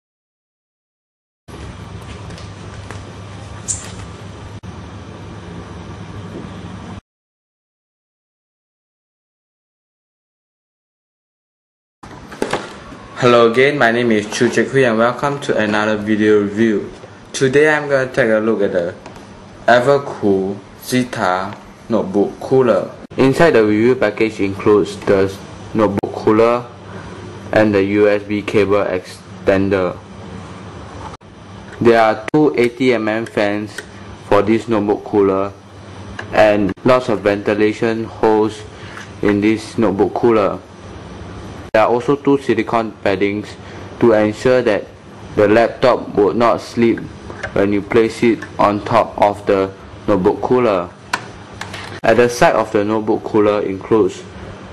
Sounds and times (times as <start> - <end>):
Speech: 13.2 - 19.0, 19.7 - 26.8, 27.5 - 30.0, 31.8 - 35.6, 36.3 - 40.7, 41.8 - 51.0, 52.0 - 54.4.